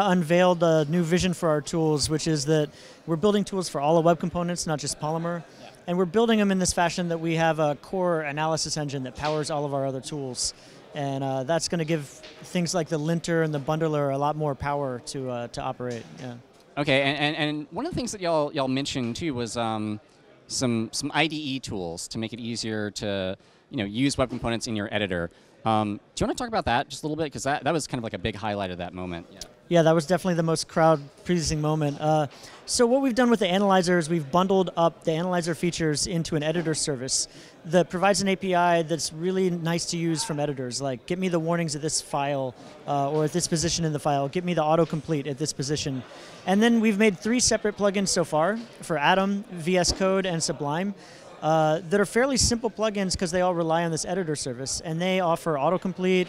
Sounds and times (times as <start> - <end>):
Speech: 0.0 - 56.2.